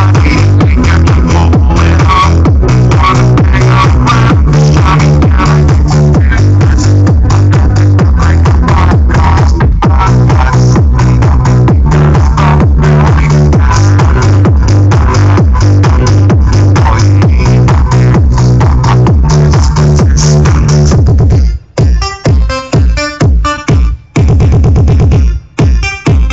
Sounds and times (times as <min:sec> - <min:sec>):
Music: 0:00.0 - 0:26.3.